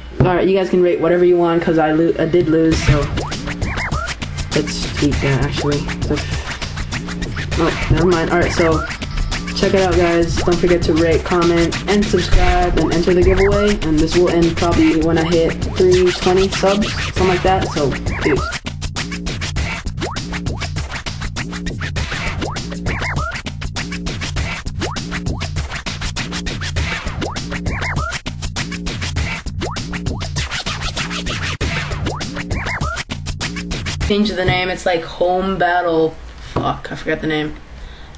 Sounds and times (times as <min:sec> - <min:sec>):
Speech: 0:00.2 - 0:03.1, 0:04.6 - 0:06.2, 0:07.6 - 0:08.9, 0:09.6 - 0:18.5, 0:34.0 - 0:37.6
Music: 0:02.3 - 0:34.9.